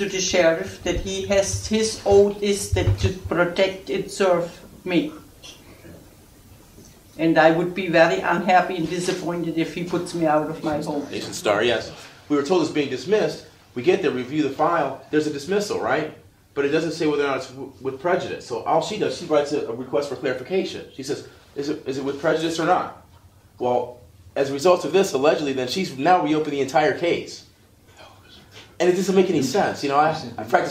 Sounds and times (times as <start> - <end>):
Speech: 0.0 - 5.3, 7.2 - 23.0, 23.6 - 27.5, 28.8 - 30.7.